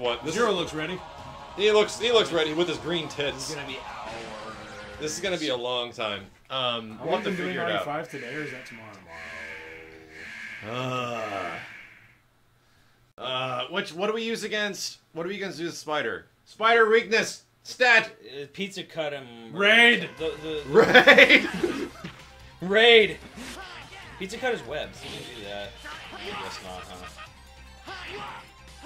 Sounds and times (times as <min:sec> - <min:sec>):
Speech: 0:05.0 - 0:09.0, 0:13.2 - 0:20.8, 0:22.6 - 0:27.1.